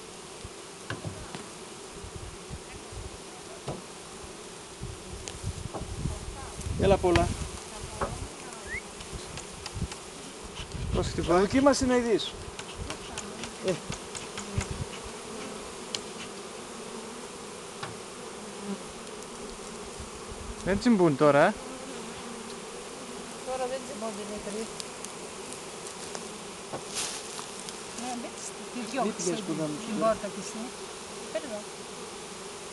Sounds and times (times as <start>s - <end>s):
Bee, wasp, etc.: 0.0s - 32.7s
Fly, housefly: 0.0s - 32.7s.